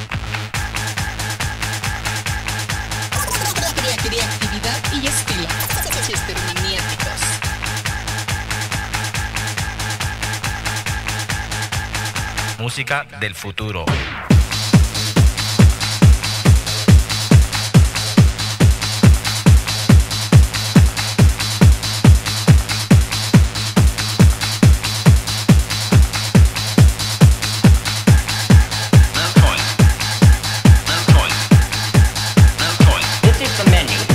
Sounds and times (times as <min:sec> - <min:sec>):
Techno: 0:00.0 - 0:12.8, 0:13.9 - 0:34.1
Speech: 0:03.4 - 0:07.4, 0:12.6 - 0:14.0, 0:29.2 - 0:29.8, 0:30.9 - 0:31.5, 0:32.6 - 0:34.1.